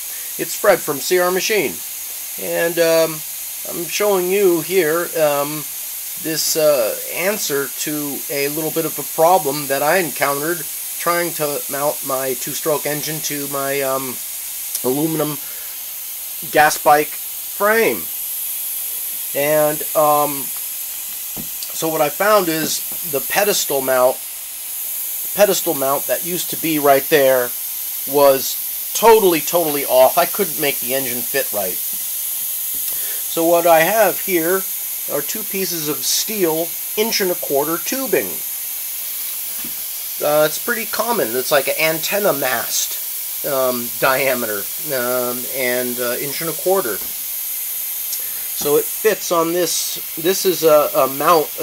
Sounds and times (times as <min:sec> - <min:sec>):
Speech: 0:00.4 - 0:01.8, 0:02.4 - 0:14.2, 0:14.8 - 0:15.4, 0:16.4 - 0:18.1, 0:19.4 - 0:20.5, 0:21.6 - 0:24.2, 0:25.4 - 0:27.5, 0:28.1 - 0:31.8, 0:33.3 - 0:38.4, 0:40.2 - 0:47.1, 0:48.6 - 0:51.6.